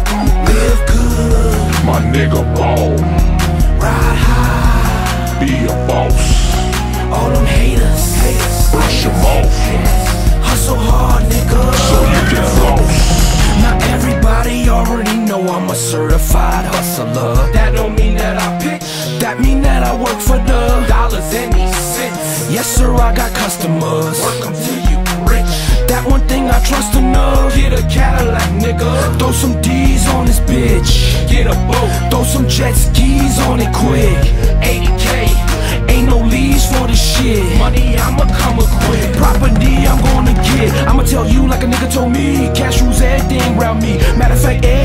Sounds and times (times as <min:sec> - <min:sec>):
Music: 0:00.0 - 0:44.8.